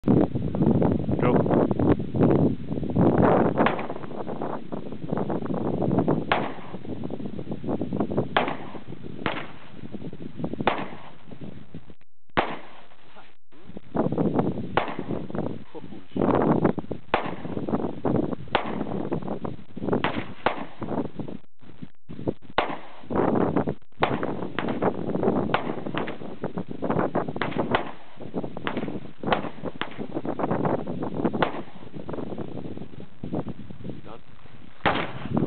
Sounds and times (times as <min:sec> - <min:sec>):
Outside, rural or natural: 0:00.0 - 0:35.4
Speech: 0:01.2 - 0:01.4, 0:15.7 - 0:16.2, 0:34.0 - 0:34.2.